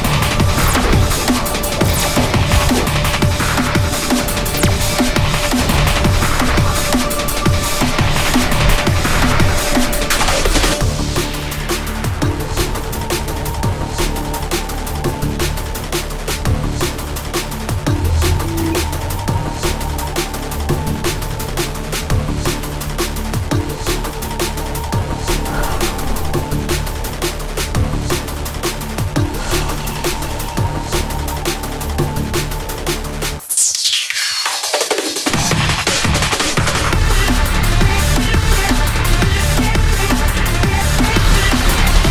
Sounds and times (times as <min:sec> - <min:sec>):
Drum and bass: 0:00.0 - 0:42.1.